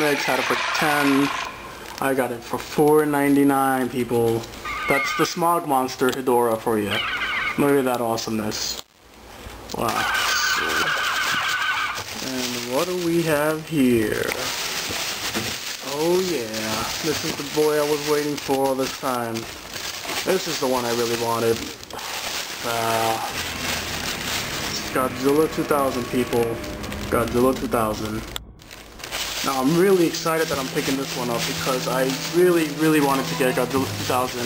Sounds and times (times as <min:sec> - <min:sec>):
Speech: 0:00.0 - 0:07.0, 0:07.6 - 0:08.8, 0:09.7 - 0:11.0, 0:12.2 - 0:14.6, 0:15.8 - 0:19.5, 0:20.2 - 0:21.8, 0:22.6 - 0:23.4, 0:24.7 - 0:28.3, 0:29.4 - 0:34.4.